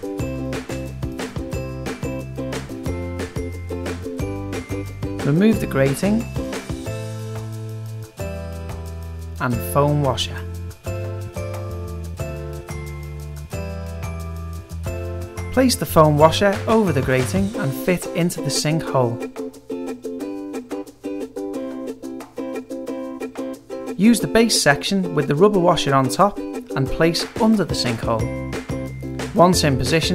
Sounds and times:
Music: 0:00.0 - 0:30.1
Speech: 0:05.2 - 0:06.3, 0:09.4 - 0:10.5, 0:15.5 - 0:19.3, 0:24.0 - 0:28.3, 0:29.3 - 0:30.1.

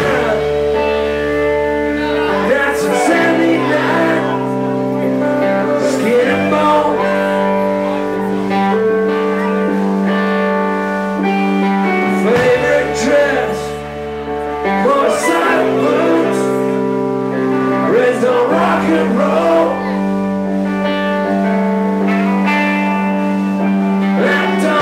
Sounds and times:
Music: 0:00.0 - 0:24.8.

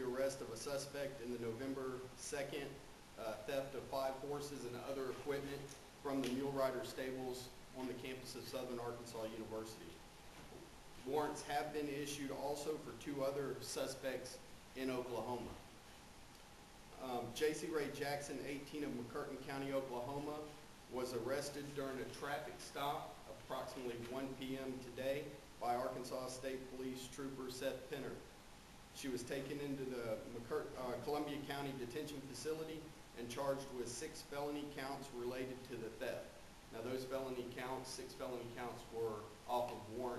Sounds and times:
Speech: 0:00.0 - 0:10.0, 0:11.0 - 0:15.6, 0:17.0 - 0:28.3, 0:29.0 - 0:40.1.

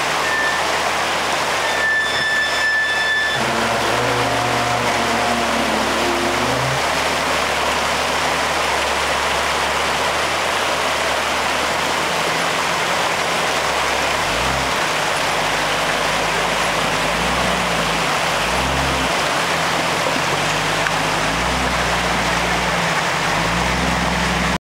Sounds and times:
Stream: 0:00.0 - 0:24.6
Waterfall: 0:00.0 - 0:24.6.

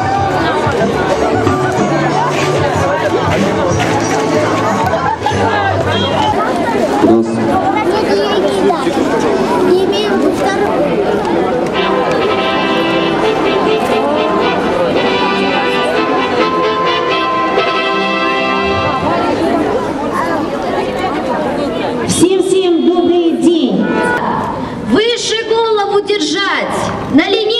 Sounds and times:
Music: 0:00.0 - 0:06.4, 0:11.7 - 0:19.6.

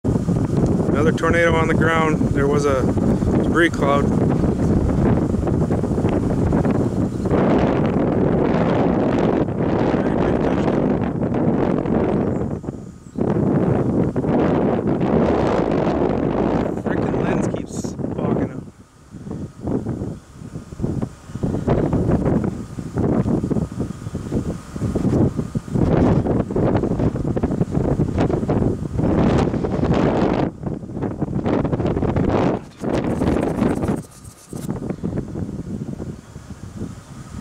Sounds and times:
Wind noise (microphone): 0:00.0 - 0:37.4
Speech: 0:00.9 - 0:04.1, 0:16.8 - 0:18.7.

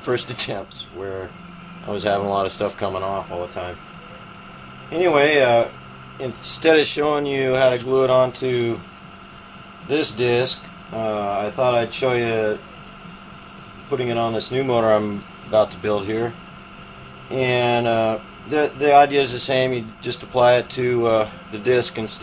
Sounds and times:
Speech: 0:00.0 - 0:01.3, 0:01.9 - 0:03.8, 0:04.9 - 0:08.8, 0:09.9 - 0:12.6, 0:13.9 - 0:16.4, 0:17.3 - 0:22.2.

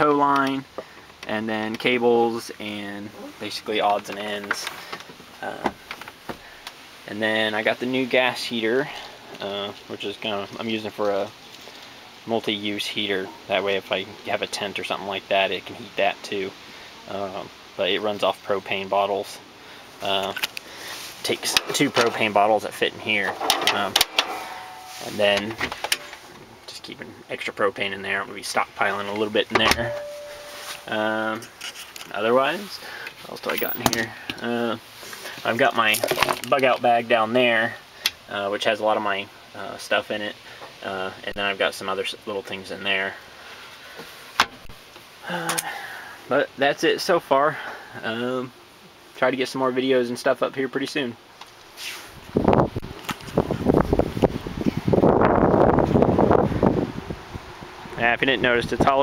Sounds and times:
Speech: 0:00.0 - 0:04.7, 0:05.4 - 0:05.8, 0:07.1 - 0:11.4, 0:12.2 - 0:19.4, 0:20.0 - 0:20.4, 0:21.2 - 0:24.0, 0:25.0 - 0:25.7, 0:26.6 - 0:30.0, 0:30.8 - 0:31.5, 0:32.1 - 0:34.8, 0:35.4 - 0:43.2, 0:45.2 - 0:48.6, 0:49.2 - 0:51.2, 0:58.0 - 0:59.0.

